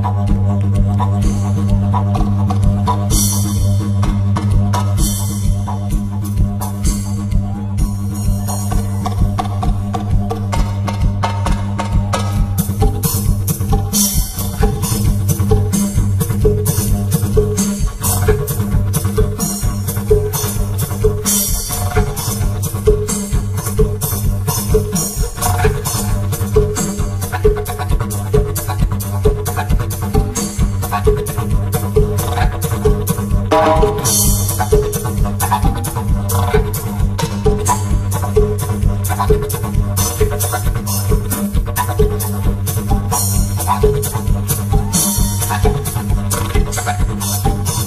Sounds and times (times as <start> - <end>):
Music: 0.0 - 47.8.